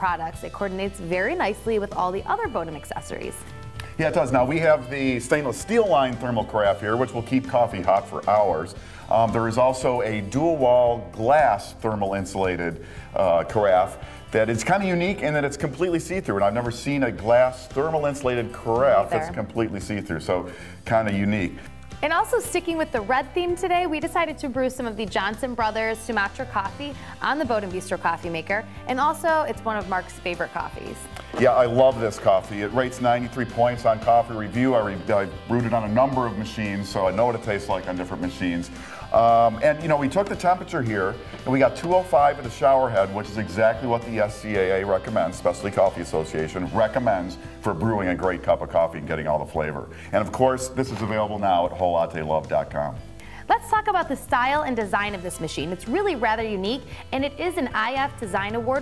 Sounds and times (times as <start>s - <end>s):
Music: 0.0s - 58.8s
Speech: 4.0s - 22.8s, 39.2s - 53.0s.